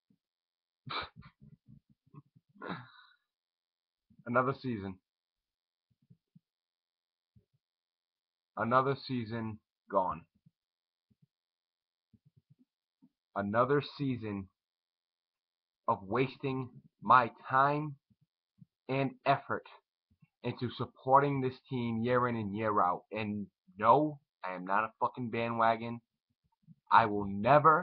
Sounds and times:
Speech: 4.3s - 5.0s, 8.6s - 10.3s, 13.4s - 14.5s, 15.9s - 18.0s, 18.9s - 19.8s, 20.5s - 26.0s, 26.9s - 27.8s.

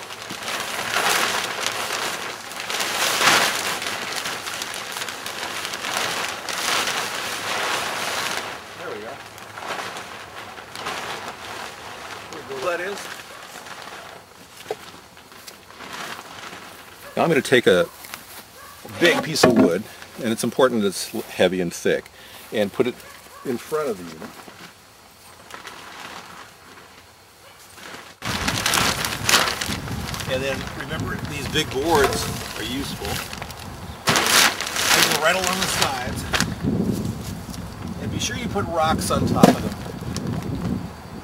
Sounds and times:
Speech: 8.8s - 9.2s, 12.3s - 13.1s, 17.2s - 17.9s, 18.9s - 24.3s, 30.3s - 33.2s, 34.9s - 36.2s, 38.0s - 39.7s.

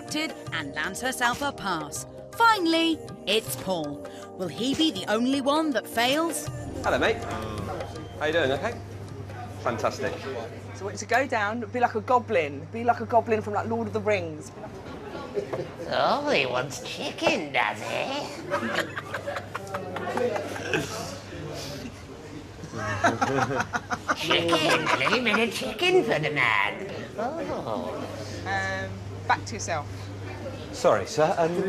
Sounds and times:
Laughter: 18.5s - 21.1s, 22.8s - 25.7s.

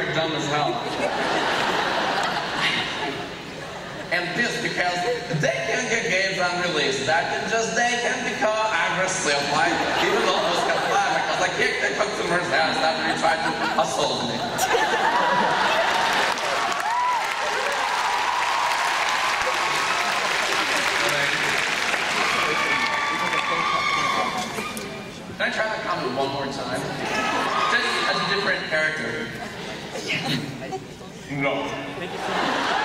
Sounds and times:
Male speech, man speaking: 0.0s - 0.8s, 4.1s - 14.5s, 21.0s - 21.4s, 25.4s - 27.0s, 27.6s - 29.4s, 31.3s - 32.0s.

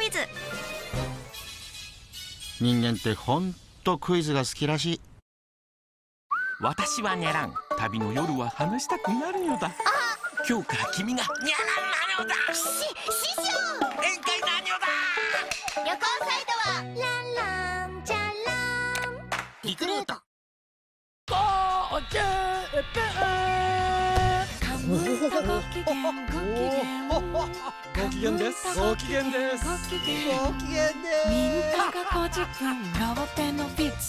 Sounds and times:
Music: 0.0s - 3.2s, 6.6s - 19.5s, 22.2s - 34.0s
Speech: 2.6s - 5.0s, 6.6s - 9.8s.

